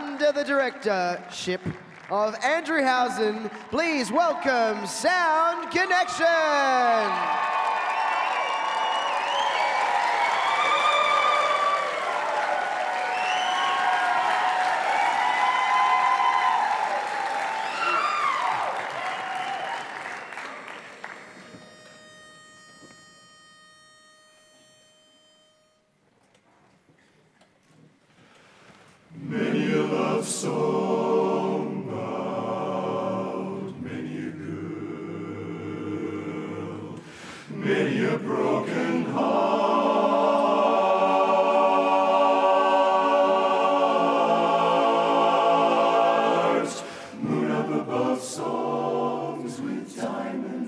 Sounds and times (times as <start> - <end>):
Clapping: 0.0 - 2.2, 7.1 - 21.3
Applause: 0.0 - 3.8, 5.5 - 21.5
Crowd: 0.0 - 22.0.